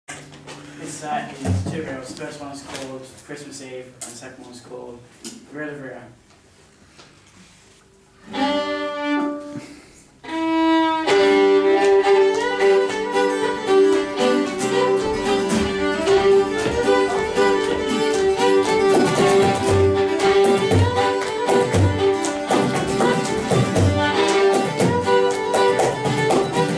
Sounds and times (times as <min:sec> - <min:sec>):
Speech: 0:00.8 - 0:06.2
Violin, fiddle: 0:08.2 - 0:26.7.